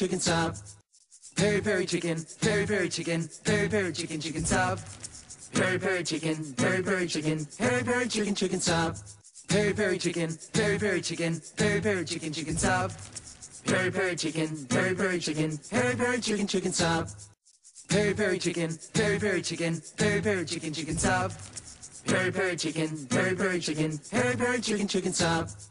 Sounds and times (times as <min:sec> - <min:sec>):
Music: 0:00.0 - 0:25.7.